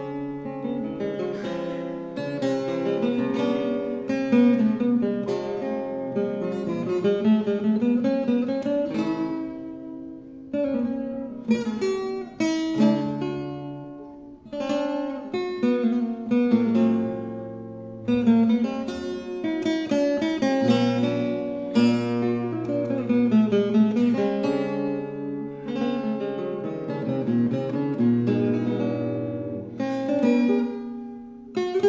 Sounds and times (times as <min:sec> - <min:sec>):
Guitar: 0:00.0 - 0:31.8.